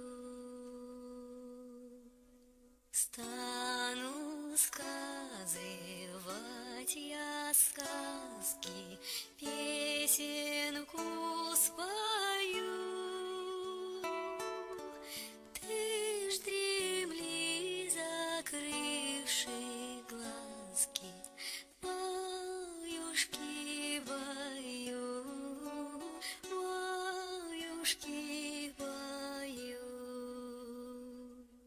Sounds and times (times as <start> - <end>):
Lullaby: 0.0 - 31.6.